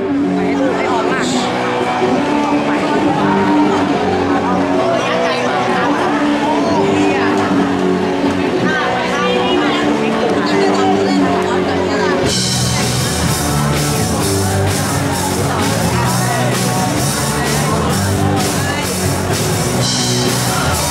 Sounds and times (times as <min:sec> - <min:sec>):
Music: 0:00.0 - 0:20.9
Speech: 0:00.0 - 0:20.9.